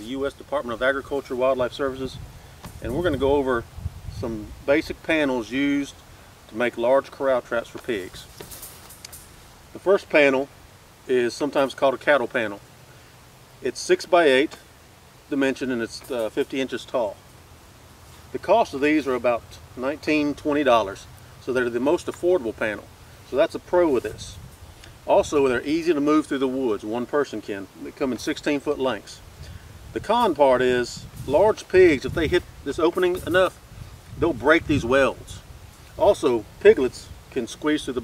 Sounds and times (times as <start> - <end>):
Speech: 0.0 - 2.2, 2.8 - 8.3, 9.8 - 10.5, 11.1 - 12.6, 13.6 - 14.6, 15.3 - 17.2, 18.3 - 24.4, 25.1 - 29.2, 30.0 - 33.6, 34.2 - 35.4, 36.0 - 38.0.